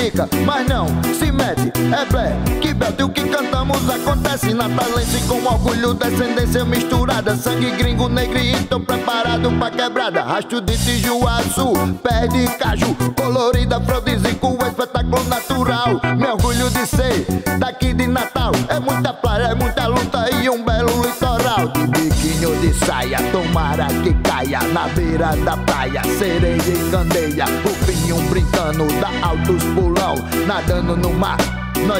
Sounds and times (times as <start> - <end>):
Music: 0.0 - 31.9.